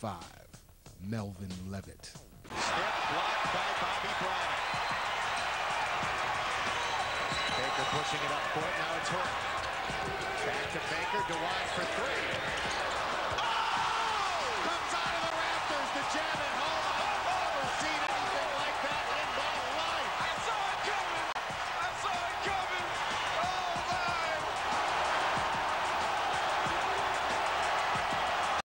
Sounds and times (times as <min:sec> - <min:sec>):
Music: 0:00.0 - 0:28.6.